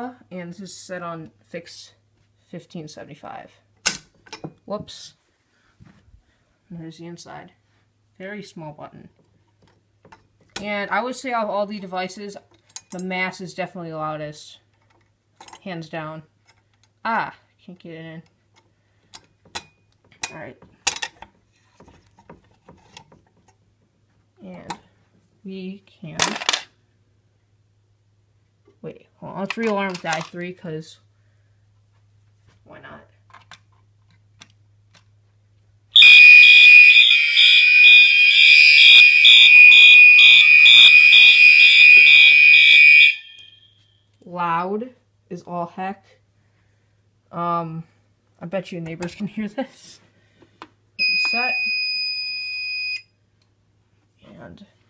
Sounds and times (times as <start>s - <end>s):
Speech: 0.0s - 3.6s, 4.7s - 5.2s, 6.7s - 7.6s, 8.2s - 9.2s, 10.6s - 14.7s, 15.6s - 16.3s, 17.0s - 18.3s, 20.3s - 20.7s, 24.4s - 24.8s, 25.4s - 26.4s, 28.8s - 31.1s, 32.6s - 33.2s, 44.2s - 46.2s, 47.3s - 50.1s, 51.0s - 51.7s, 54.2s - 54.8s
Fire alarm: 36.0s - 44.0s, 51.0s - 53.1s.